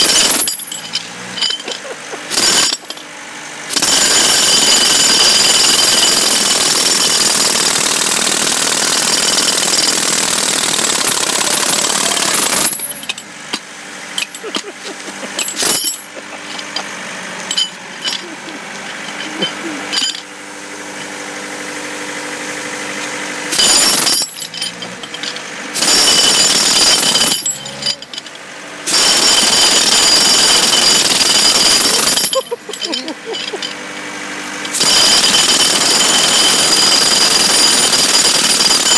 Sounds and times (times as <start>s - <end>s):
Outside, urban or manmade: 0.0s - 38.9s.